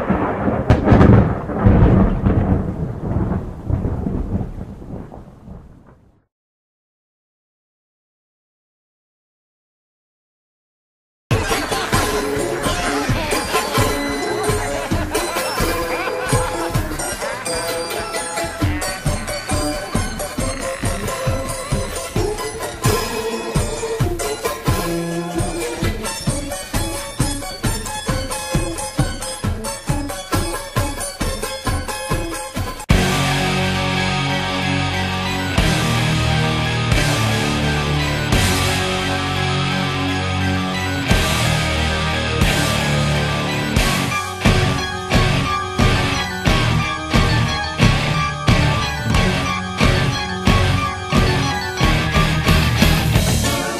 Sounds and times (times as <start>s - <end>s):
Soul music: 11.3s - 53.7s
Scary music: 11.4s - 53.7s.